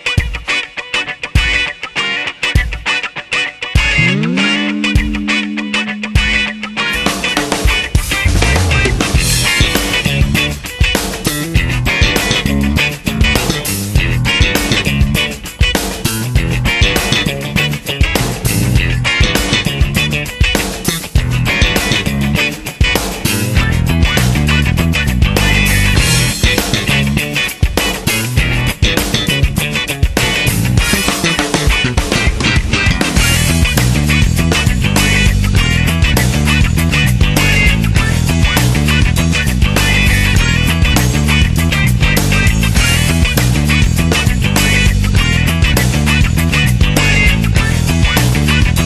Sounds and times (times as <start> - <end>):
Music: 0.0 - 48.8.